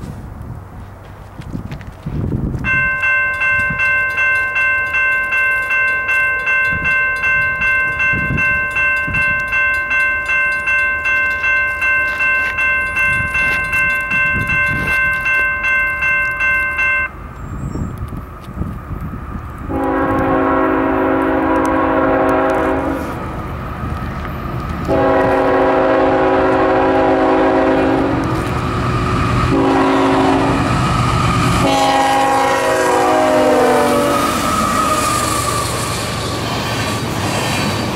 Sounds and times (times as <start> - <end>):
Train horn: 19.7 - 23.2, 24.8 - 28.5, 29.5 - 30.7, 31.6 - 36.0.